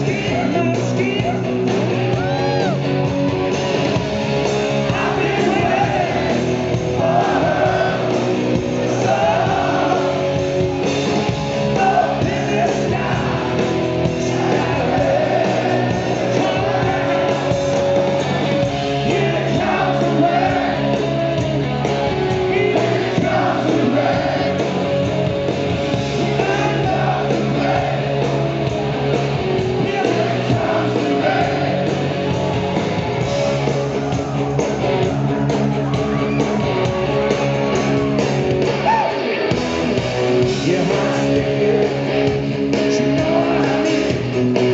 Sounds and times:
Music: 0.0s - 44.7s.

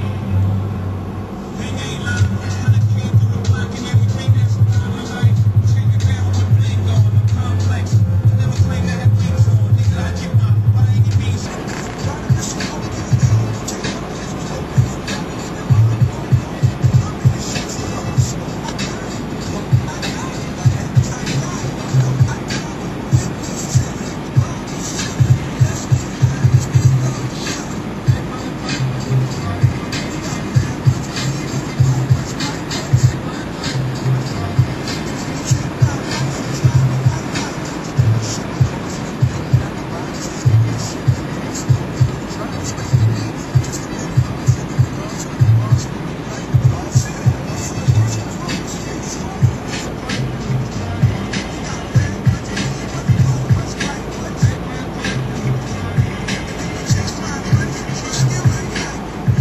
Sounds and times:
Music: 0.0s - 59.4s.

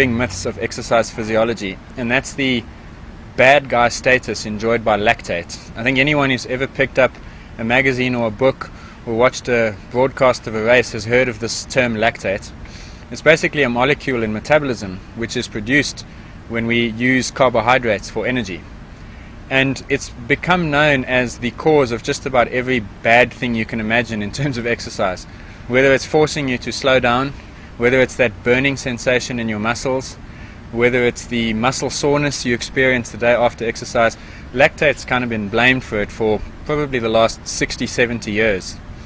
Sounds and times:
Male speech, man speaking: 0.0s - 2.7s, 3.4s - 18.6s, 19.5s - 38.8s.

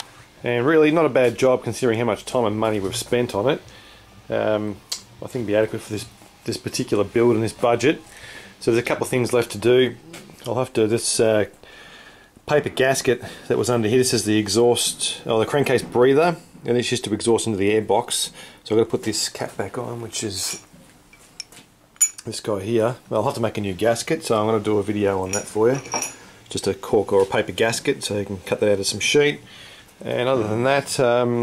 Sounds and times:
Speech: 0.4s - 3.6s, 4.3s - 8.0s, 8.6s - 11.6s, 12.5s - 20.6s, 22.2s - 25.9s, 26.5s - 29.4s, 30.0s - 31.4s.

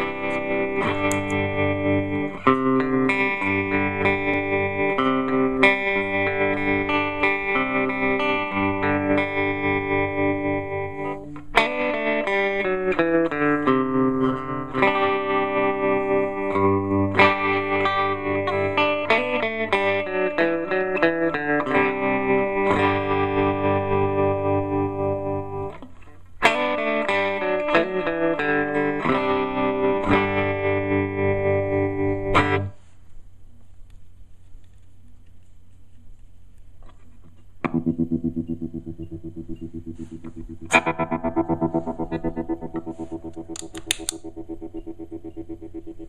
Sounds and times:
Steel guitar, slide guitar: 0.0s - 32.8s, 37.6s - 46.0s.

